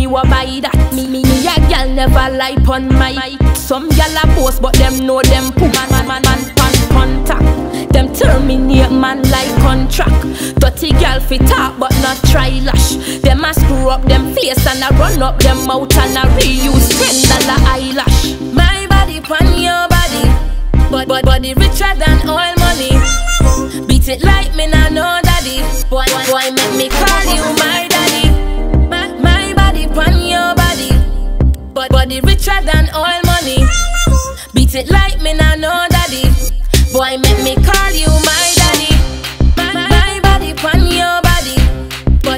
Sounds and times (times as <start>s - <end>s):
Electronic music: 0.0s - 42.3s.